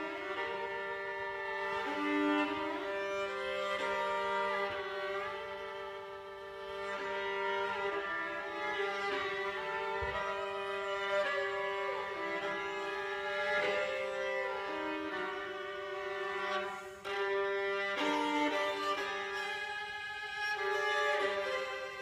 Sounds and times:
Bowed string instrument: 0.0s - 22.0s
Orchestra: 0.0s - 22.0s.

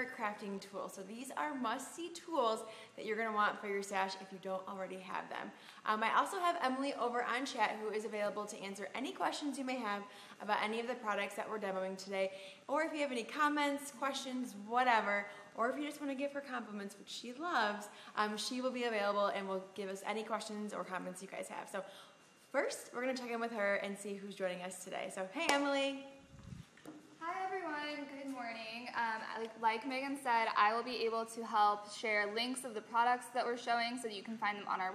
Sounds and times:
Speech: 0.0s - 21.9s, 22.6s - 26.1s, 27.2s - 34.9s.

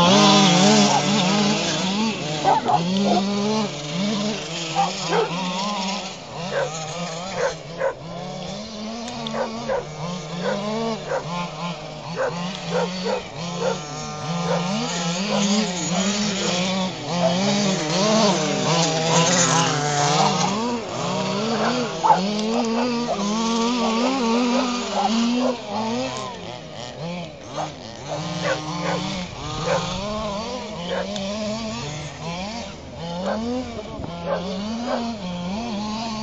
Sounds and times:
Car: 0.0s - 36.2s.

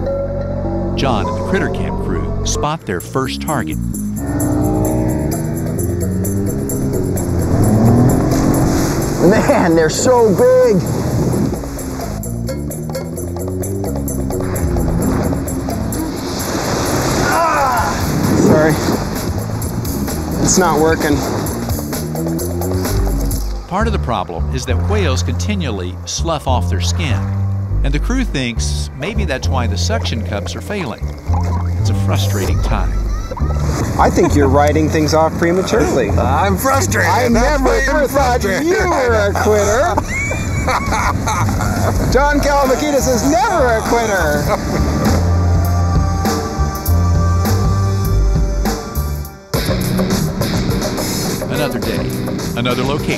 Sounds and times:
Music: 0.0s - 53.1s
Speech: 1.0s - 3.8s, 23.7s - 27.3s, 27.9s - 31.0s, 31.8s - 33.0s, 34.0s - 39.8s.

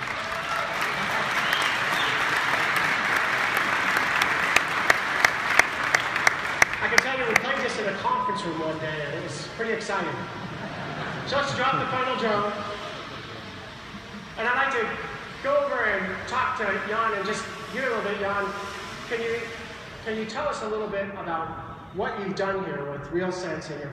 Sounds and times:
Speech: 6.8s - 10.3s, 11.3s - 12.8s, 14.4s - 23.9s.

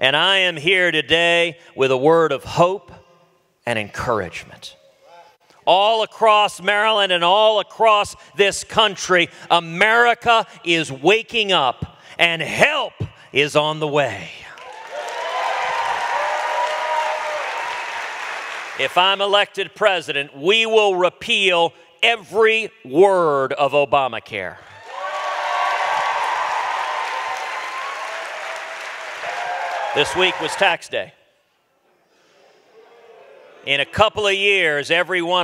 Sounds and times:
Male speech, man speaking: 0.0s - 3.0s, 3.7s - 14.6s, 18.8s - 24.6s, 30.0s - 31.2s, 33.6s - 35.4s
Narration, monologue: 0.0s - 14.7s, 18.8s - 24.8s, 30.0s - 31.7s, 33.6s - 35.4s.

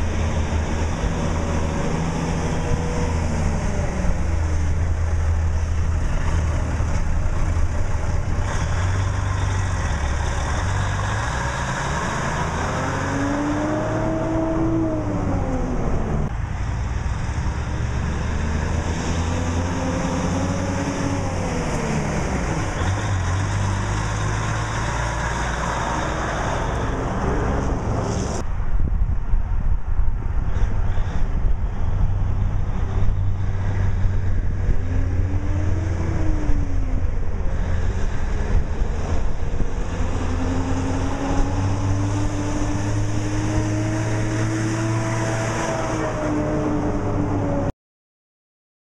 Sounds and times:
Truck: 0.0s - 47.7s.

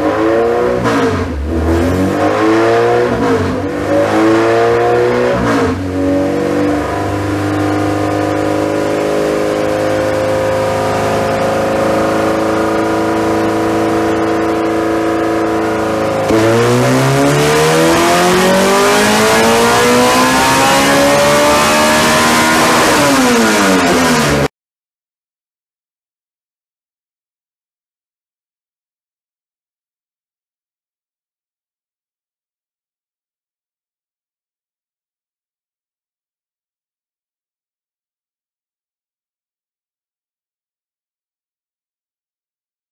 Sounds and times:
Accelerating, revving, vroom: 0.0s - 24.5s
Medium engine (mid frequency): 0.0s - 24.5s
Vehicle: 0.0s - 24.5s.

